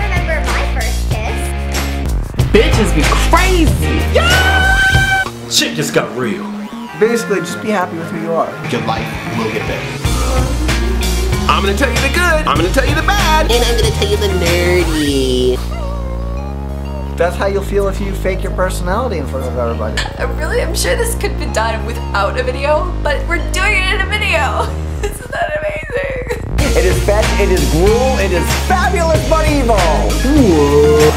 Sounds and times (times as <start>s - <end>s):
Music: 0.0s - 31.1s.